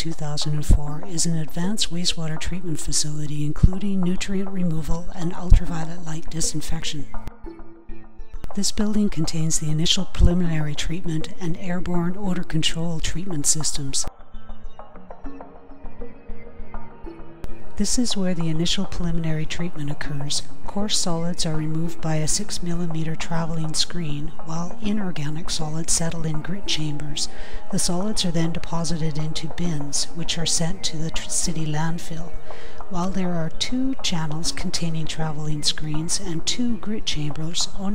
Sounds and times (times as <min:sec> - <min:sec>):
Speech: 0:00.0 - 0:07.2, 0:08.5 - 0:14.1, 0:17.8 - 0:32.3, 0:32.9 - 0:37.9
Music: 0:00.0 - 0:37.9.